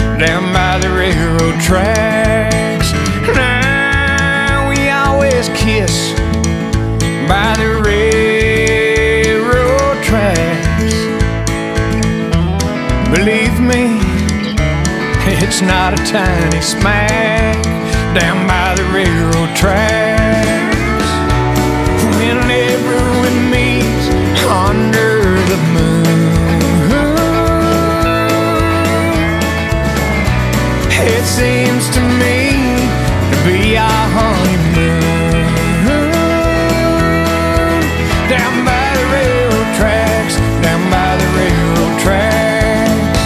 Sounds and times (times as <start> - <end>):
Music: 0.0 - 43.2.